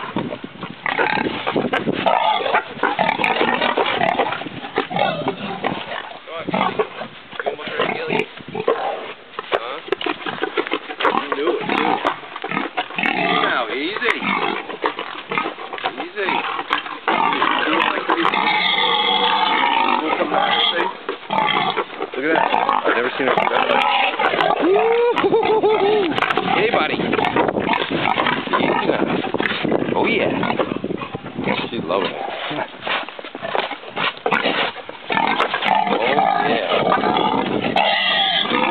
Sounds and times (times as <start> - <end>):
Oink: 0.0 - 38.7
Speech: 7.4 - 8.3, 13.2 - 14.3, 15.9 - 16.5, 17.3 - 18.6, 19.8 - 21.0, 22.2 - 25.2, 25.8 - 27.1, 28.5 - 29.1, 29.9 - 30.5, 31.5 - 32.7, 35.9 - 36.8.